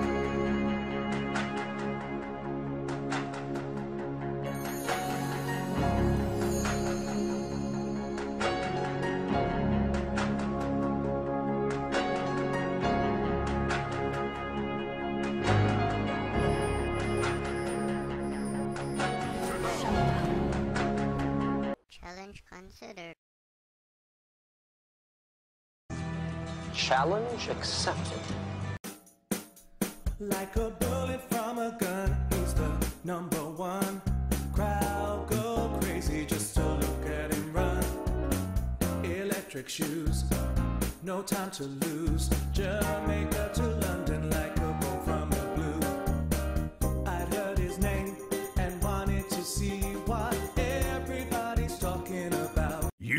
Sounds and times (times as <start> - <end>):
Music: 0.0 - 21.8, 25.9 - 53.1
Speech: 21.9 - 23.2, 26.8 - 28.3.